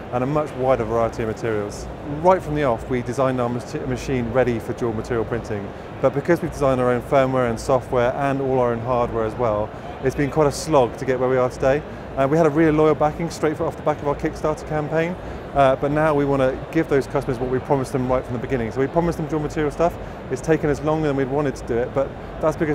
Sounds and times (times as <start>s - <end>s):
Speech: 0.0s - 22.7s.